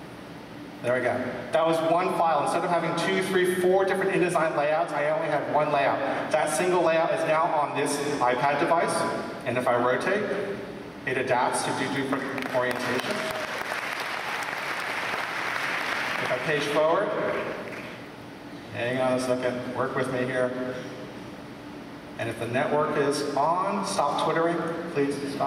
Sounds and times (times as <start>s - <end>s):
Speech: 0.8s - 10.5s, 11.1s - 13.3s, 16.2s - 17.4s, 18.7s - 20.8s, 22.2s - 25.4s.